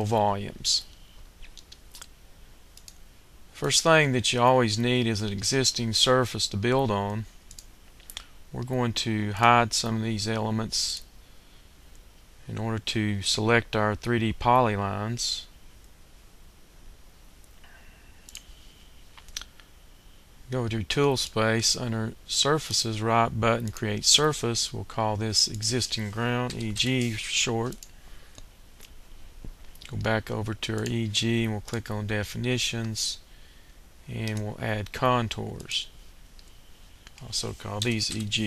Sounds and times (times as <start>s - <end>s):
Speech: 0.0s - 0.9s, 3.6s - 7.3s, 8.5s - 11.1s, 12.4s - 15.5s, 20.5s - 27.8s, 29.8s - 33.3s, 34.1s - 35.9s, 37.2s - 38.4s.